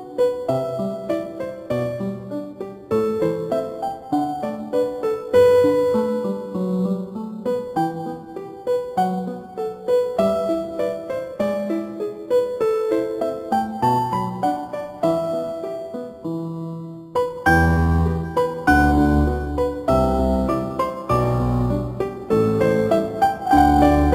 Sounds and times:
Background music: 0.0s - 24.1s.

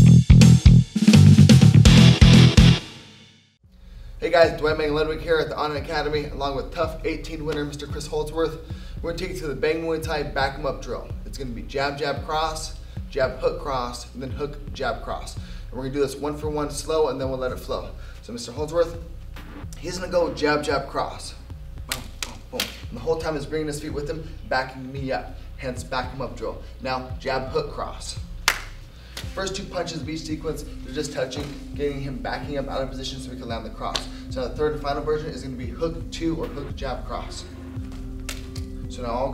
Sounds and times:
Speech: 4.2s - 19.0s, 19.8s - 28.2s, 29.4s - 37.5s, 38.9s - 39.3s.

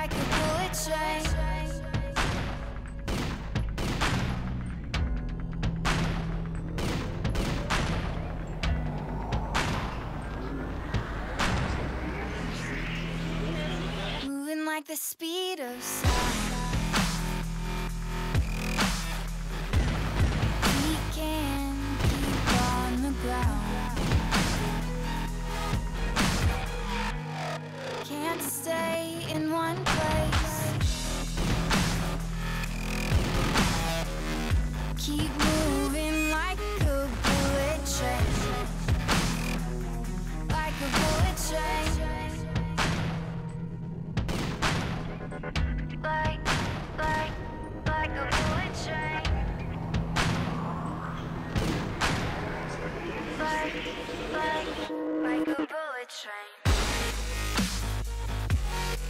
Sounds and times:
Gunshot, gunfire: 2.2s - 4.4s.

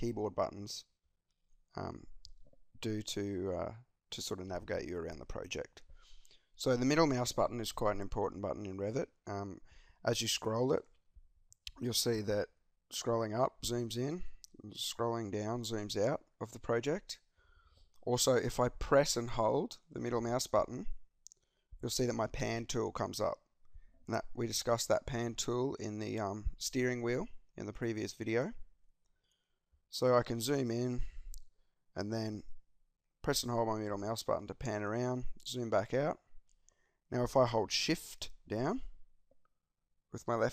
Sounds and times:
Speech: 0.0s - 1.0s, 1.8s - 2.1s, 2.8s - 5.8s, 6.6s - 10.9s, 11.7s - 17.3s, 18.0s - 21.0s, 21.8s - 23.4s, 24.1s - 28.6s, 29.9s - 31.1s, 32.0s - 32.5s, 33.2s - 36.2s, 37.1s - 38.9s, 40.2s - 40.5s.

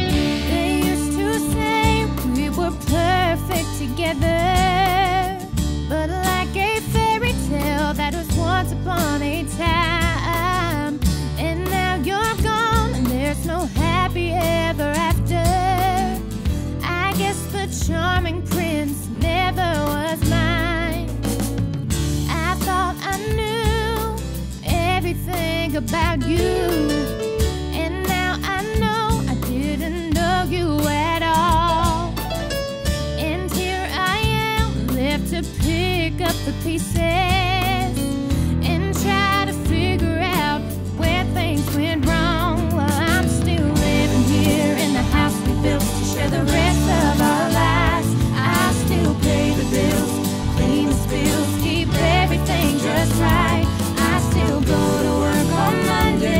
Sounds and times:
Music: 0.0s - 56.3s.

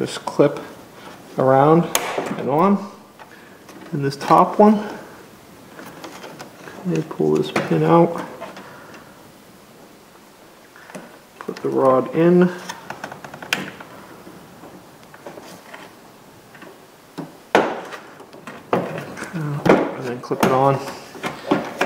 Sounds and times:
Speech: 1.4s - 3.0s, 3.9s - 5.1s, 6.8s - 8.3s, 11.5s - 12.7s, 19.3s - 21.1s.

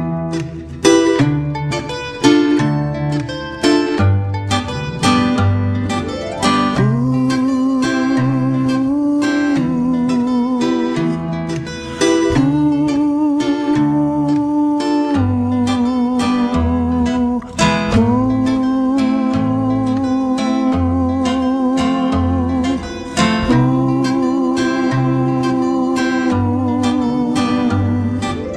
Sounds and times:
Music: 0.0s - 28.5s.

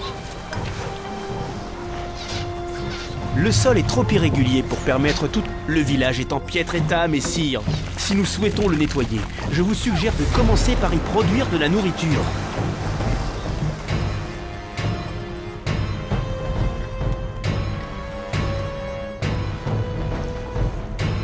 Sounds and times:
Music: 0.0s - 21.2s
Speech: 3.3s - 12.4s.

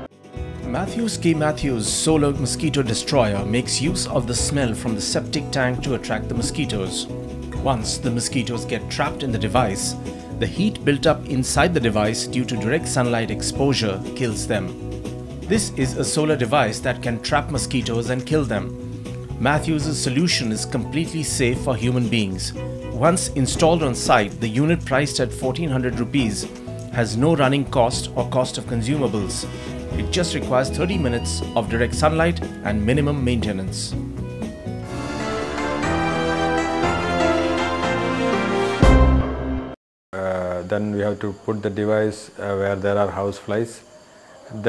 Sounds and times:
Music: 0.0s - 39.8s
Speech: 0.7s - 14.8s, 15.5s - 18.7s, 19.4s - 34.0s, 40.2s - 43.9s, 44.5s - 44.6s.

